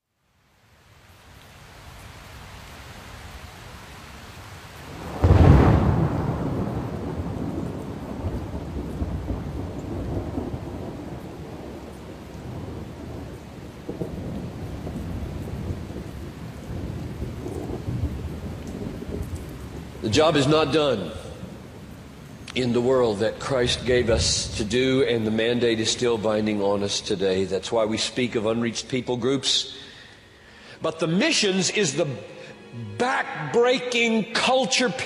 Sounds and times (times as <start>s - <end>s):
Thunderstorm: 4.9s - 27.4s
Speech: 20.0s - 21.4s, 22.5s - 29.8s, 30.8s - 35.0s.